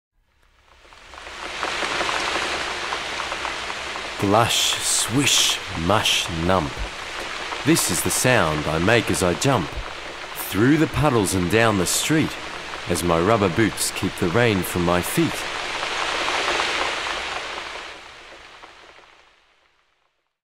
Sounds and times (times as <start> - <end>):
Speech: 4.2 - 6.9, 7.6 - 9.8, 10.4 - 15.4.